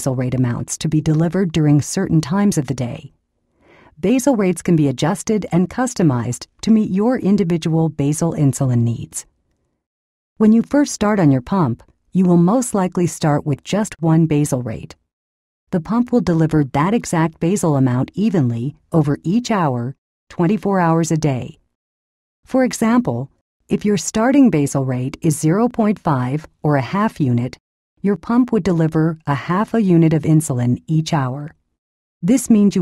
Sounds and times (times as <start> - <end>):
Speech: 0.0 - 3.1, 4.0 - 9.3, 10.4 - 15.0, 15.8 - 21.6, 22.5 - 31.6, 32.2 - 32.8.